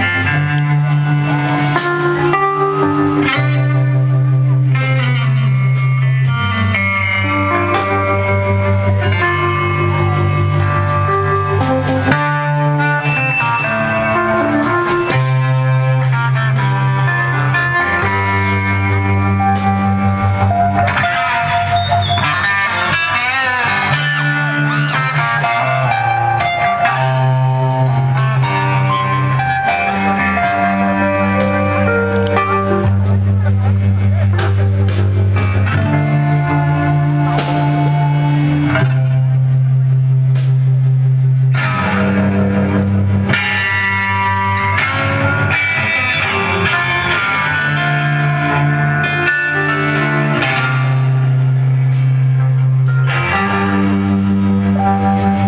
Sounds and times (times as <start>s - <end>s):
Music: 0.0s - 55.4s.